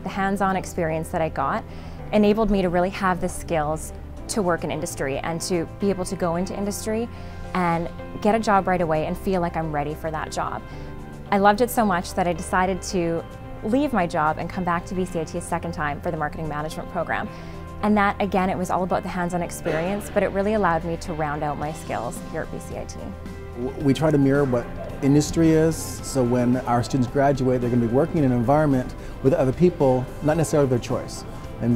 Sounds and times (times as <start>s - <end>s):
Music: 0.0s - 31.7s.